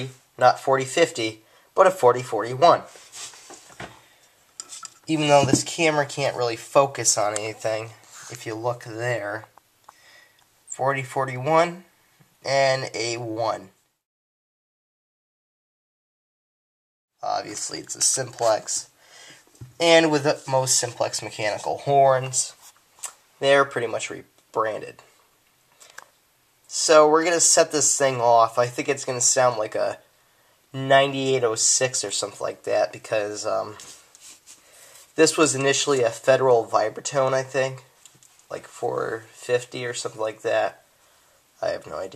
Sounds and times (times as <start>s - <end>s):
Speech: 0.0s - 3.0s, 5.1s - 9.6s, 10.7s - 13.8s, 17.2s - 19.0s, 19.7s - 25.2s, 26.7s - 30.1s, 30.7s - 34.0s, 35.2s - 40.9s, 41.6s - 42.1s.